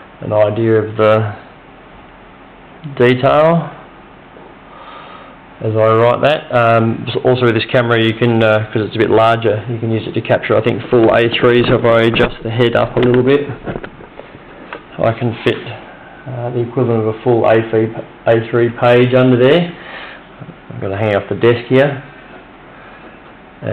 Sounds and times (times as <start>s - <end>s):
Speech: 0.2s - 1.5s, 2.8s - 3.9s, 5.6s - 13.6s, 14.9s - 19.8s, 20.4s - 22.1s.